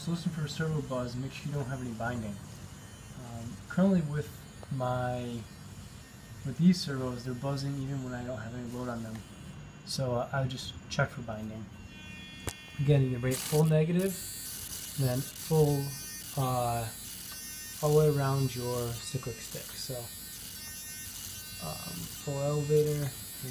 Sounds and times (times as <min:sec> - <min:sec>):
Mains hum: 0:00.0 - 0:23.5.